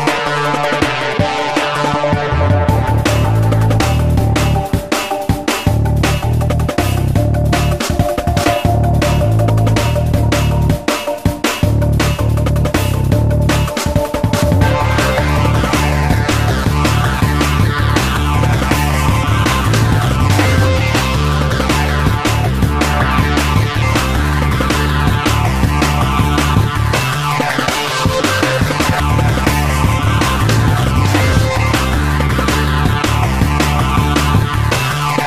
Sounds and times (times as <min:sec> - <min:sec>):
Sampler: 0:00.0 - 0:35.2.